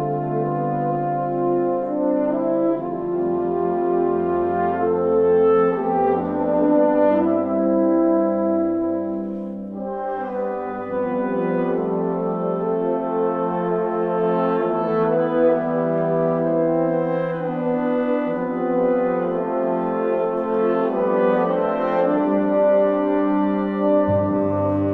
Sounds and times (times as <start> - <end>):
Brass instrument: 0.0 - 24.9.